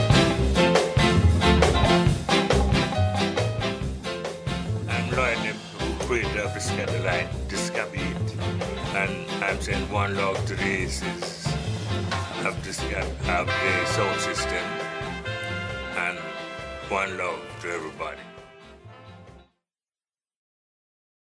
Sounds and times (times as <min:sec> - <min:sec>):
Music: 0:00.0 - 0:19.6
Speech: 0:04.9 - 0:11.5, 0:12.4 - 0:14.8, 0:16.0 - 0:18.4.